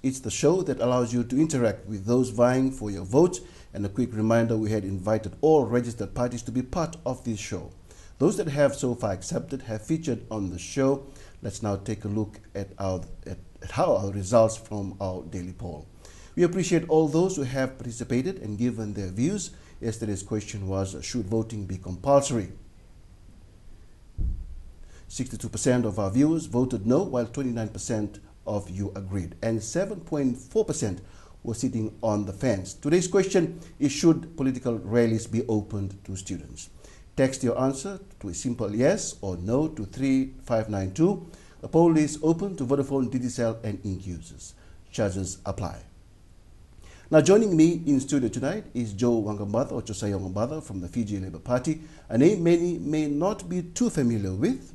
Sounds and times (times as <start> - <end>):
Speech: 0.0 - 22.6, 25.1 - 46.0, 47.1 - 54.7.